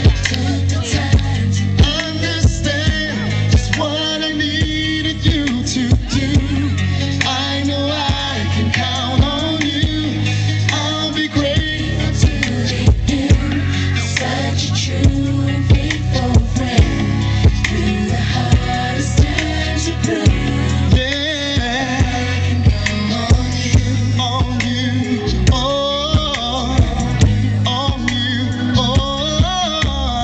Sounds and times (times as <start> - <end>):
Male singing: 0.0 - 30.2
Music: 0.0 - 30.2.